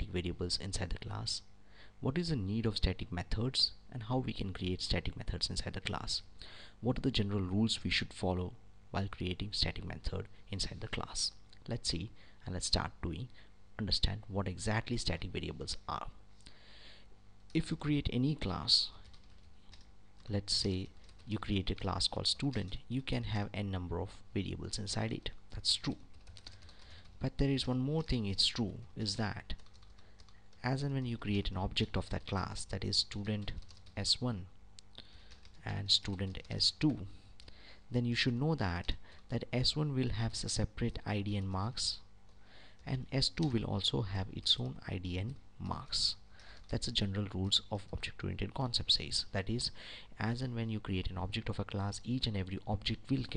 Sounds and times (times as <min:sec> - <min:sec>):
Speech: 0:00.0 - 0:16.2, 0:17.5 - 0:19.0, 0:20.2 - 0:26.1, 0:27.2 - 0:29.6, 0:30.6 - 0:34.5, 0:35.6 - 0:37.2, 0:37.9 - 0:42.1, 0:42.8 - 0:53.3.